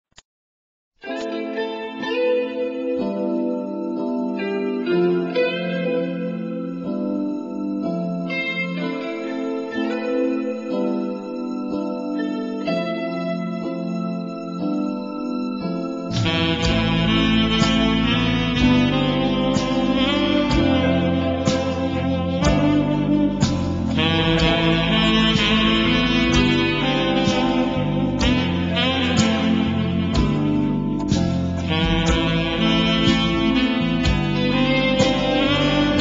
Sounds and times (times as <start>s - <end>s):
Steel guitar, slide guitar: 1.1s - 10.8s, 16.1s - 36.0s.